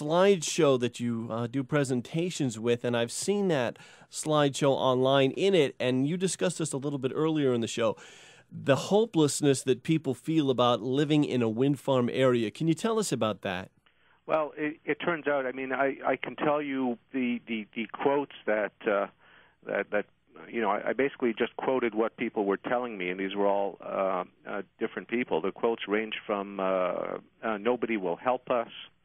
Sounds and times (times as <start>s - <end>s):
Speech: 0.0s - 13.7s, 14.3s - 29.0s.